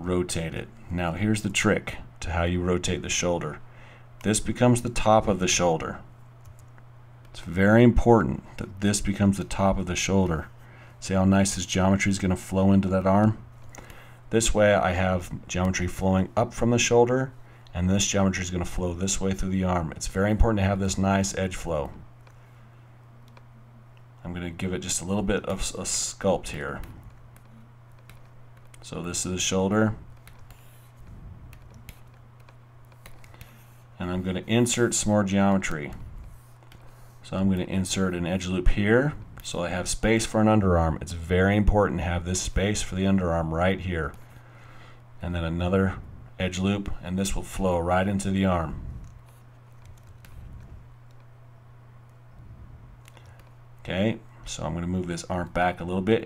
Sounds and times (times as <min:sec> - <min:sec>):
Speech: 0:00.0 - 0:03.6, 0:04.2 - 0:06.1, 0:07.4 - 0:13.4, 0:14.3 - 0:22.0, 0:24.2 - 0:27.0, 0:28.8 - 0:30.0, 0:34.0 - 0:36.0, 0:37.2 - 0:44.2, 0:45.2 - 0:49.0, 0:53.8 - 0:56.2.